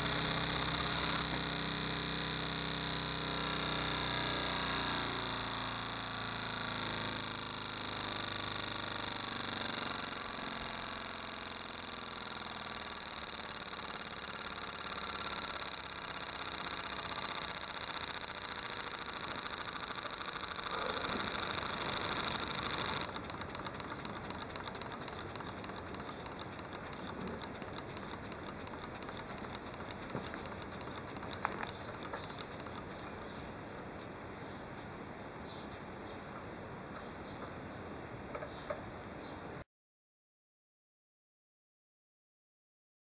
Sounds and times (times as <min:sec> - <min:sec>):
Engine: 0:00.0 - 0:34.0.